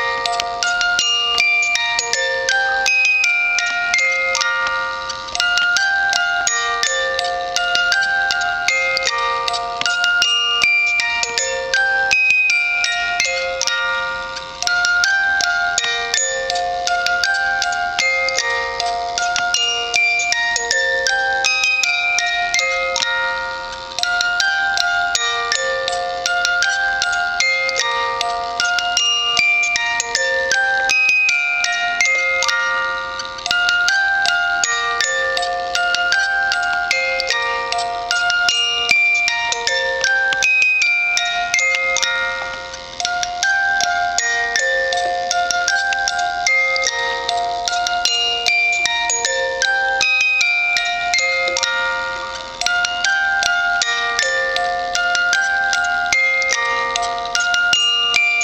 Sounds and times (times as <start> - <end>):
Music: 0.0 - 58.4.